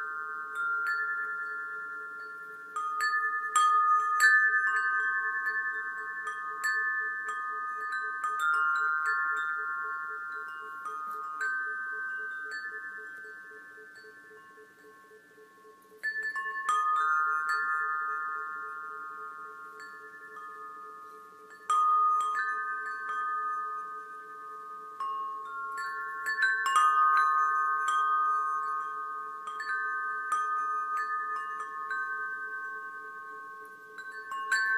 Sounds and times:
Wind chime: 0:00.0 - 0:34.7.

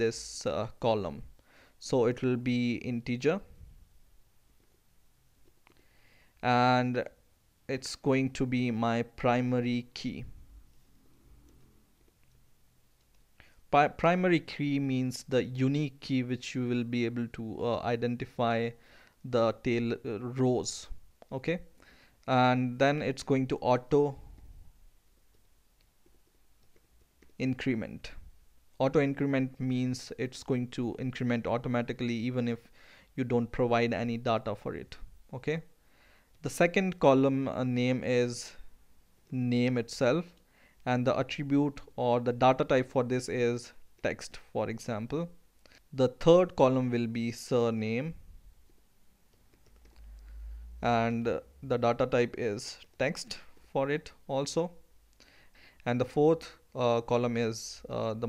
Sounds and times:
Speech: 0:00.0 - 0:03.5, 0:06.4 - 0:10.3, 0:13.7 - 0:21.7, 0:22.3 - 0:24.2, 0:27.4 - 0:28.2, 0:28.8 - 0:35.7, 0:36.4 - 0:38.6, 0:39.3 - 0:45.4, 0:46.0 - 0:48.2, 0:50.8 - 0:54.8, 0:55.8 - 0:58.2.

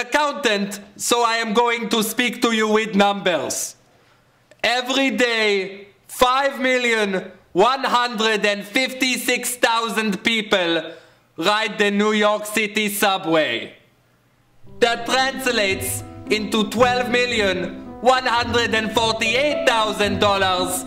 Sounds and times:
Male speech, man speaking: 0:00.0 - 0:03.8, 0:04.6 - 0:13.8, 0:14.8 - 0:20.8
Narration, monologue: 0:00.0 - 0:20.8
Music: 0:14.6 - 0:20.8.

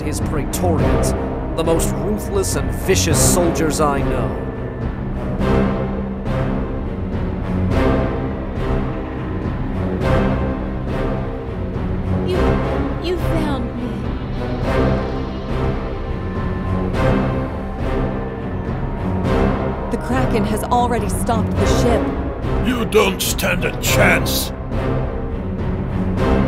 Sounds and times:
Speech: 0:00.0 - 0:04.4, 0:12.3 - 0:14.0, 0:20.0 - 0:22.0, 0:22.6 - 0:24.5
Music: 0:00.0 - 0:26.4.

